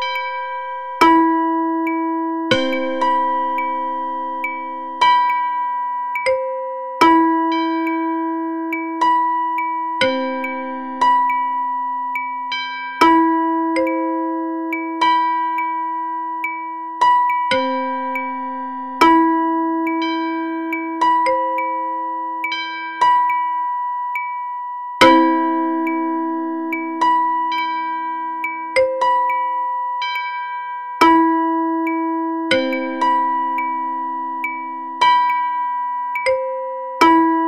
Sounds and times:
Tubular bells: 0.0s - 24.3s, 25.0s - 37.4s.

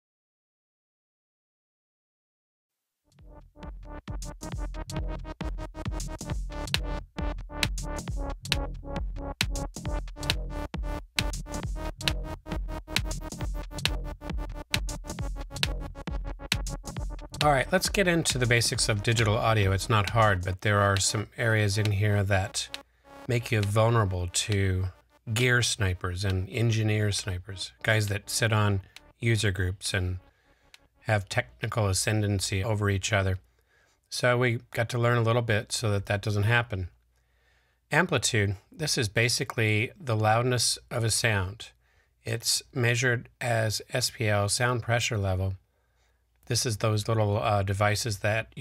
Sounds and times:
Speech: 17.4s - 30.2s, 31.0s - 33.4s, 34.1s - 37.0s, 37.9s - 45.6s, 46.5s - 48.6s.

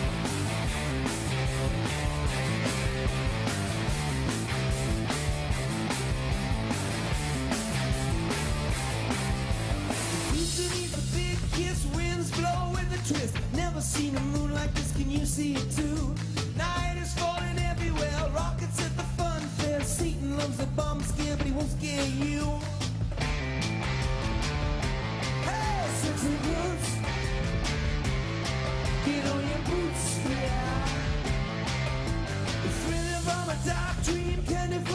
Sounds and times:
Music: 0.0s - 34.9s.

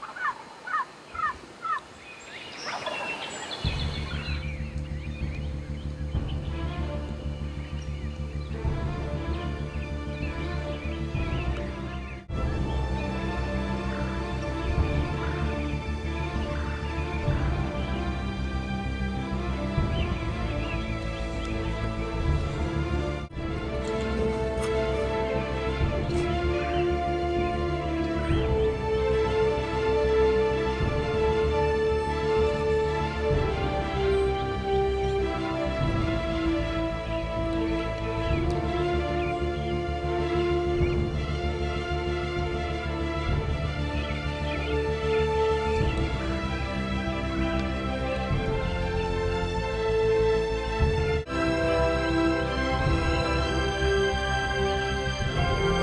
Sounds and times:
Bird: 0.0s - 12.8s, 19.8s - 22.7s
Music: 2.6s - 55.8s.

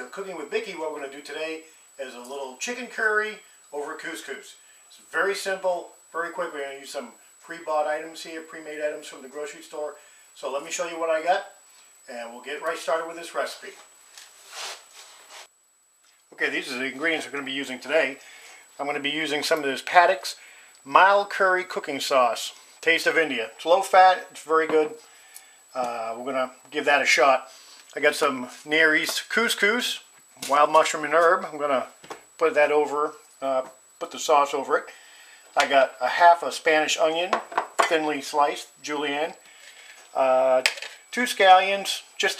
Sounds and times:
Speech: 0.0s - 13.9s, 16.3s - 18.2s, 18.8s - 25.0s, 25.7s - 35.0s, 35.6s - 39.4s, 40.1s - 42.3s.

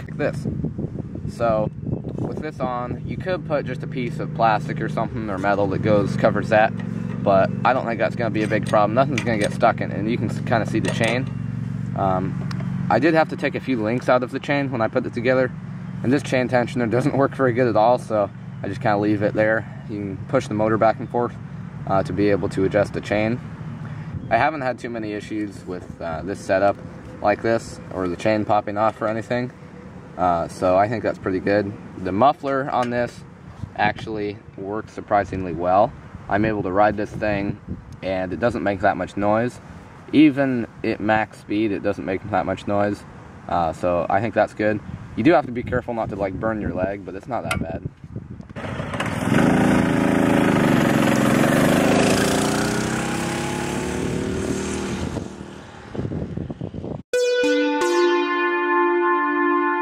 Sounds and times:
Motorcycle: 0.0s - 40.7s, 47.4s - 57.0s.

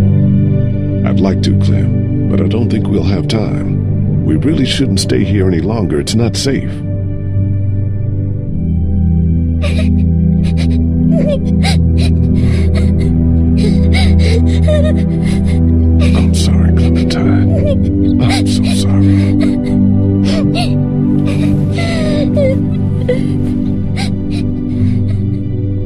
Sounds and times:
Music: 0.0s - 25.8s
Speech: 1.0s - 6.8s, 16.0s - 19.7s
Whimper: 9.6s - 25.5s.

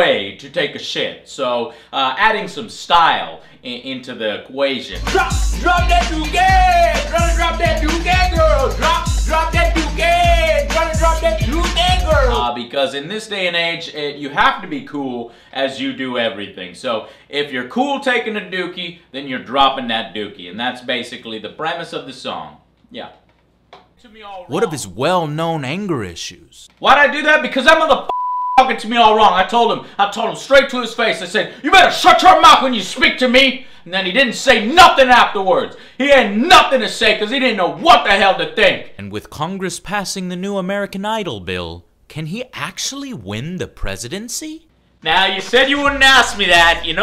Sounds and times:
Speech: 0.0s - 9.0s, 9.7s - 23.2s, 24.0s - 28.0s, 28.6s - 47.0s
Music: 4.9s - 12.5s.

